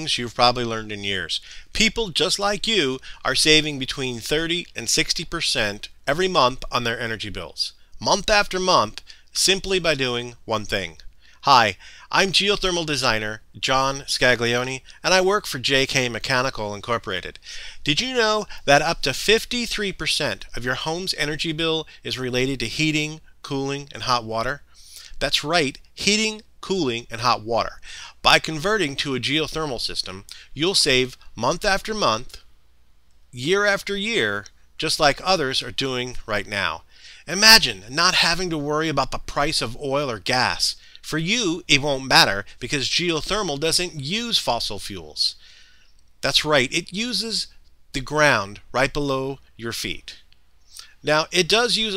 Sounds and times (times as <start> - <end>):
Speech: 0.0 - 24.6, 25.2 - 32.4, 33.4 - 45.4, 46.2 - 50.2, 50.8 - 51.9.